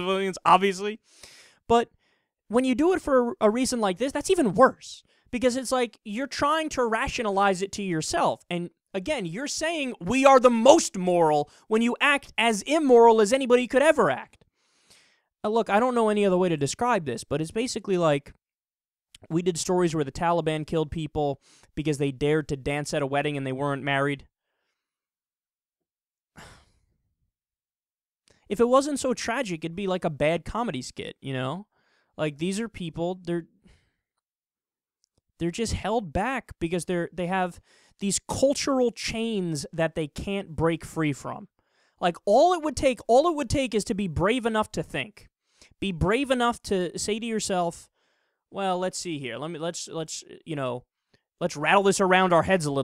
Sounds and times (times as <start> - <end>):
Speech: 0.0 - 1.0, 1.7 - 1.9, 2.5 - 14.4, 15.5 - 18.4, 19.2 - 24.3, 28.5 - 33.5, 35.4 - 47.9, 48.6 - 52.8.